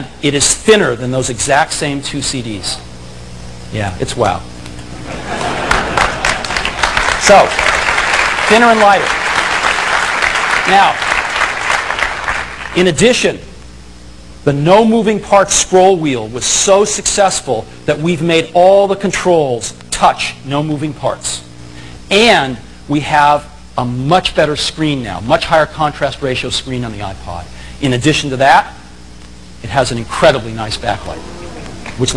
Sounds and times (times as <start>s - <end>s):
Speech: 0.0s - 2.9s, 3.7s - 4.5s, 7.2s - 7.5s, 8.5s - 9.1s, 10.7s - 11.0s, 12.8s - 13.5s, 14.5s - 21.5s, 22.1s - 28.8s, 29.6s - 32.1s.